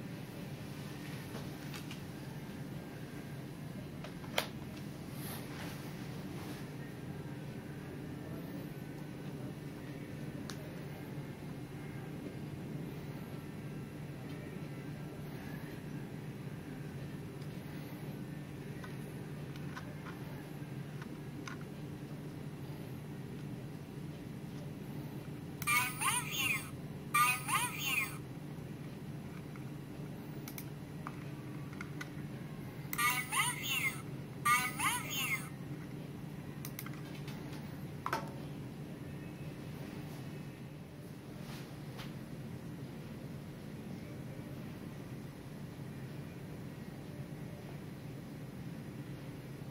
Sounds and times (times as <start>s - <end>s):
Speech: 25.6s - 28.2s, 33.0s - 35.6s.